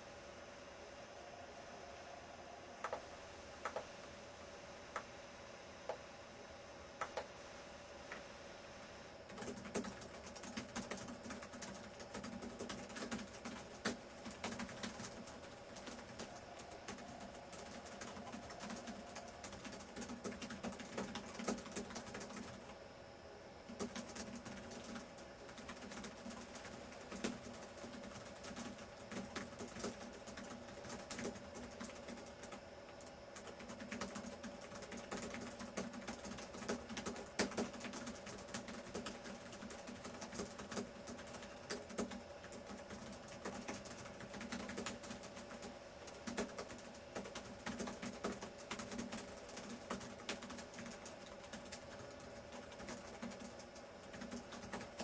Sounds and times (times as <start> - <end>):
Computer keyboard: 2.8 - 3.0, 3.6 - 3.9, 7.0 - 7.3, 9.3 - 22.8, 23.7 - 55.0.